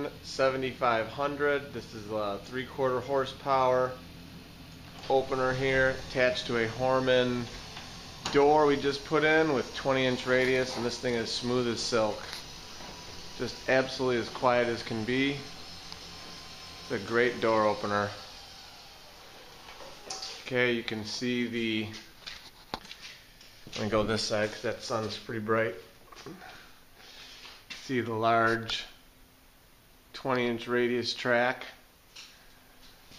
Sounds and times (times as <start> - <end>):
Speech: 0.0 - 4.0, 5.0 - 7.6, 8.3 - 12.3, 13.4 - 15.5, 16.9 - 18.3, 20.4 - 22.1, 23.7 - 25.9, 27.8 - 29.0, 30.1 - 31.8.